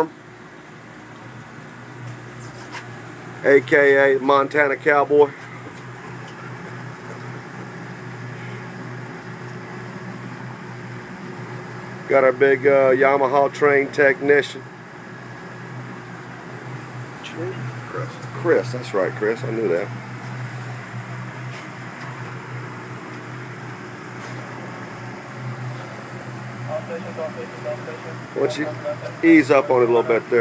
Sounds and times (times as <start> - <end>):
Speech: 3.4 - 5.4, 12.1 - 14.6, 17.2 - 19.9, 26.7 - 30.4.